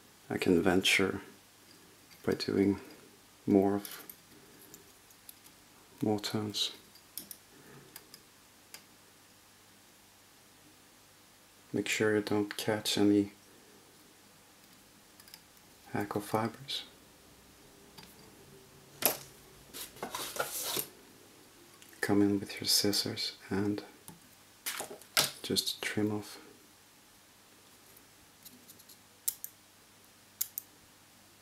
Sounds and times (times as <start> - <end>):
Speech: 0.3 - 1.3, 2.2 - 2.8, 3.5 - 4.0, 6.0 - 6.8, 11.7 - 13.4, 15.9 - 16.9, 22.0 - 24.0, 25.4 - 26.5.